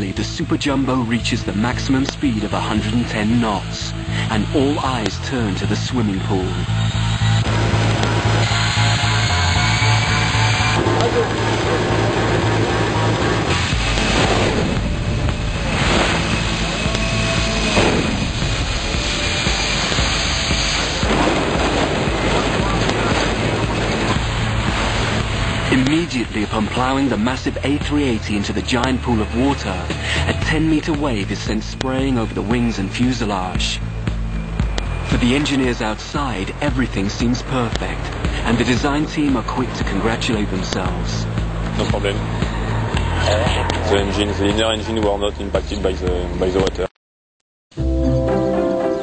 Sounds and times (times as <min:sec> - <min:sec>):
Aircraft: 0:06.3 - 0:25.7.